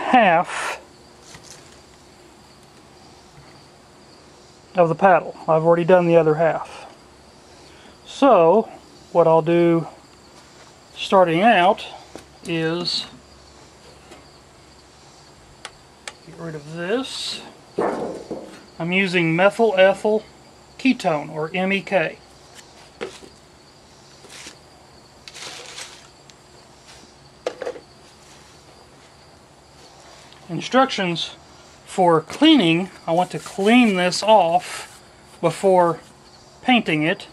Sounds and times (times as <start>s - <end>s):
Speech: 0.0s - 0.8s, 4.8s - 6.9s, 8.1s - 9.9s, 11.0s - 13.2s, 16.3s - 17.5s, 18.8s - 22.2s, 30.5s - 36.0s, 36.6s - 37.3s.